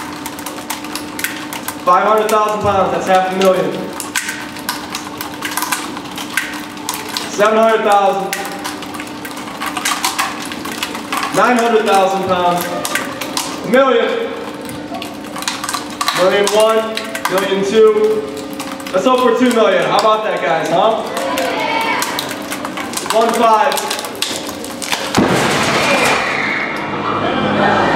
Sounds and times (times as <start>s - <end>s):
Speech: 1.9s - 3.8s, 7.3s - 8.4s, 11.4s - 12.8s, 13.7s - 14.3s, 16.2s - 18.2s, 18.9s - 22.0s, 23.1s - 23.9s.